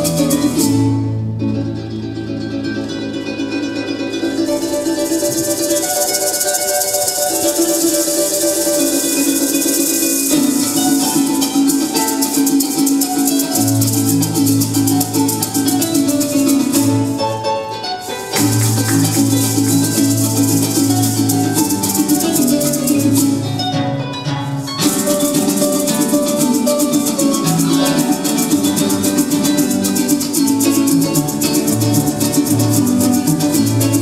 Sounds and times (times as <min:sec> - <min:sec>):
Maraca: 0:00.0 - 0:34.0.